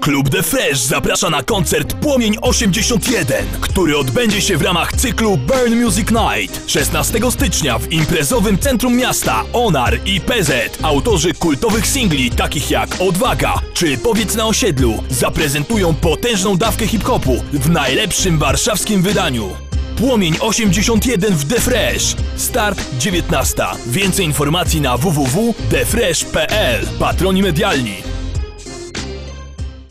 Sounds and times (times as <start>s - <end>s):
Speech: 0.0s - 28.1s.